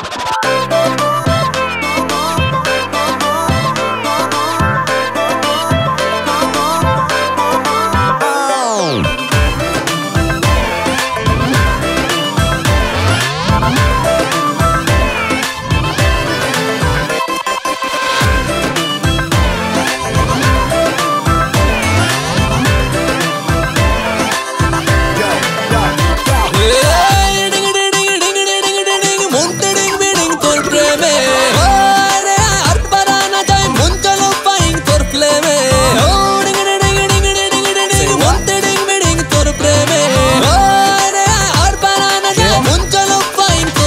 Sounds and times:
Music: 0.0 - 43.8.

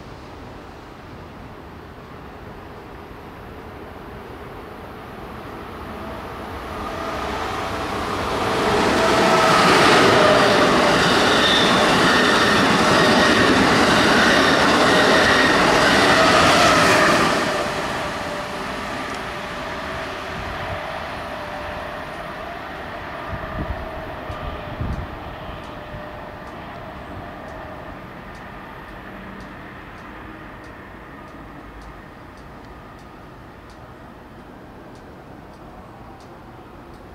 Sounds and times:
Railroad car, train wagon: 0.0 - 37.1
Train: 0.0 - 37.1.

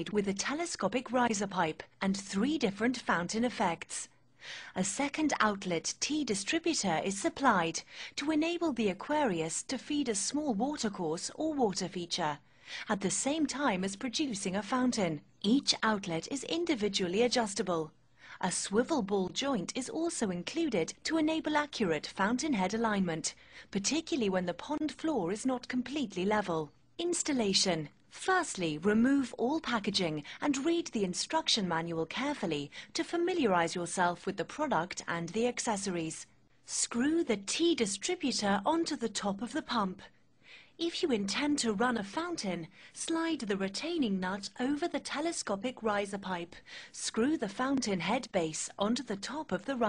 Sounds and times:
Speech: 0.0 - 4.1, 4.8 - 40.1, 40.8 - 49.8.

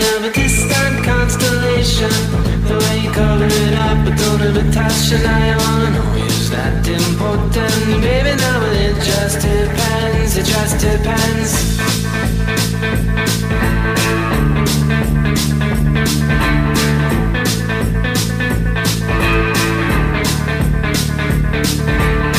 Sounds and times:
Pop music: 0.0 - 22.3.

